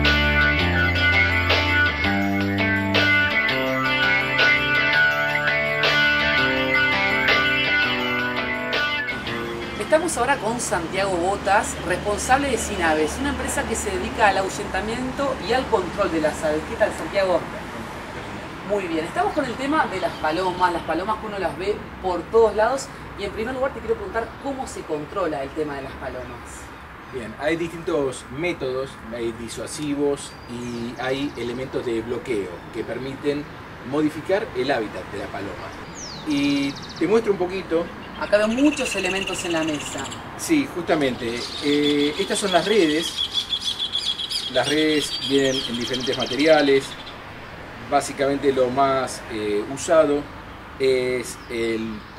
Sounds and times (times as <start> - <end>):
Outside, urban or manmade: 0.0 - 52.1
Speech: 18.7 - 43.1, 44.5 - 47.0, 47.9 - 52.1.